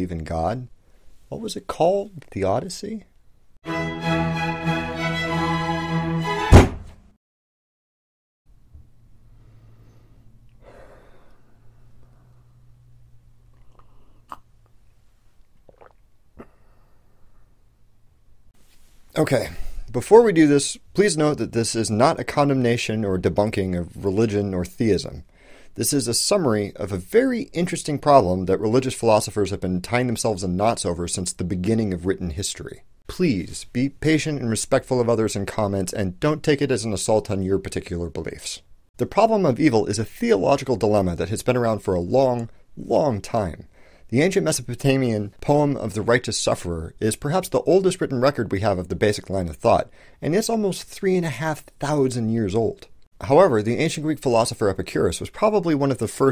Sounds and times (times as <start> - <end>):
Speech: 0.0 - 0.7, 1.3 - 3.1, 19.1 - 56.3.